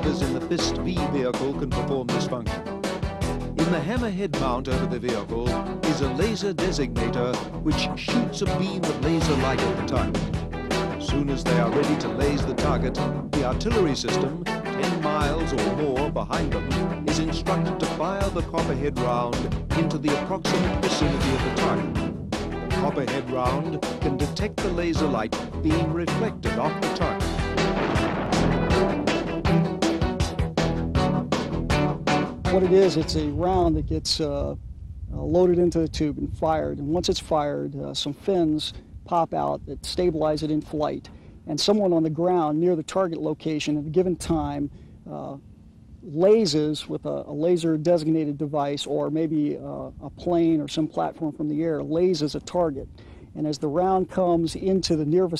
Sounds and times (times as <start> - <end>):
Speech: 0.0 - 2.6, 3.6 - 10.2, 11.0 - 21.9, 22.8 - 27.2, 32.5 - 45.4, 46.0 - 55.3
Music: 0.0 - 34.0.